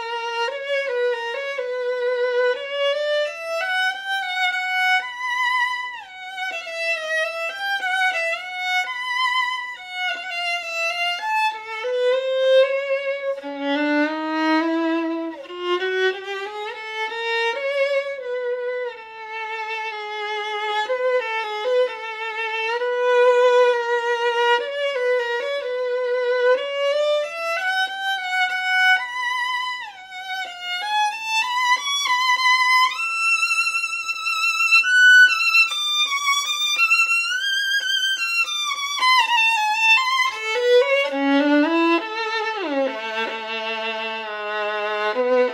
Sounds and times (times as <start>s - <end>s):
Violin, fiddle: 0.0s - 45.5s.